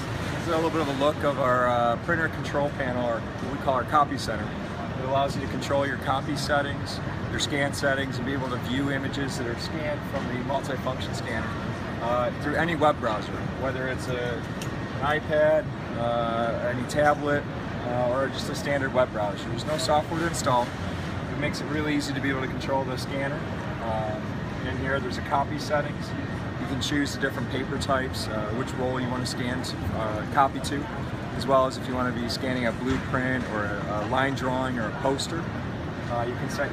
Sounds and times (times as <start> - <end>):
Speech: 0.4 - 36.7.